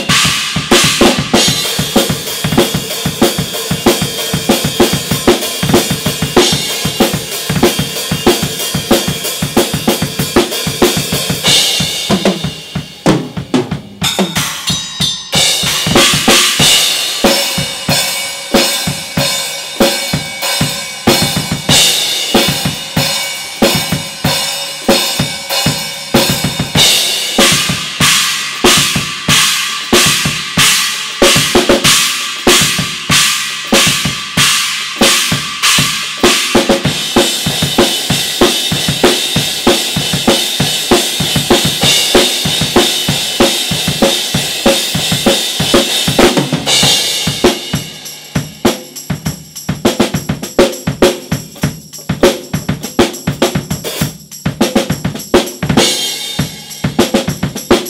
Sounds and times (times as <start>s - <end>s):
Drum kit: 0.0s - 57.9s.